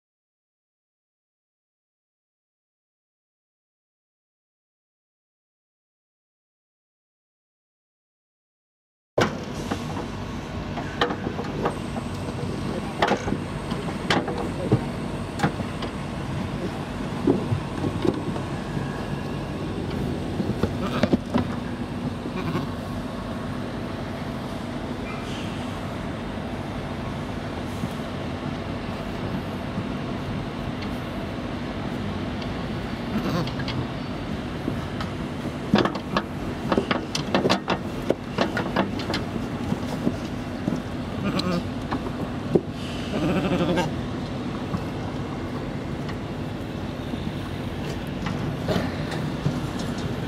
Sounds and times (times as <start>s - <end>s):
Bleat: 20.8s - 21.2s, 22.3s - 22.8s, 33.1s - 33.6s, 41.2s - 41.7s, 43.1s - 44.0s.